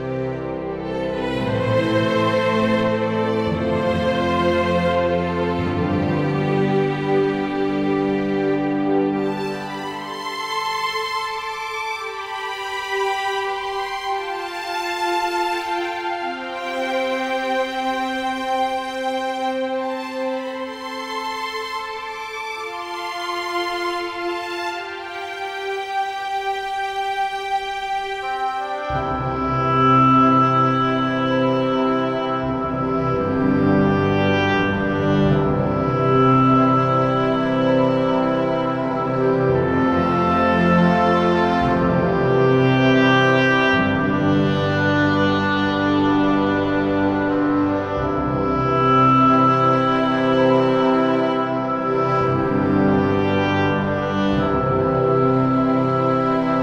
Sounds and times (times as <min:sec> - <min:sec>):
Music: 0:00.0 - 0:56.6.